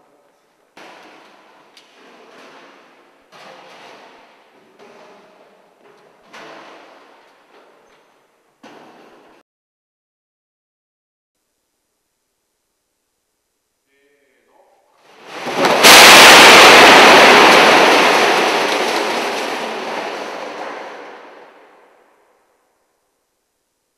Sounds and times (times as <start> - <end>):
Explosion: 15.1 - 22.3.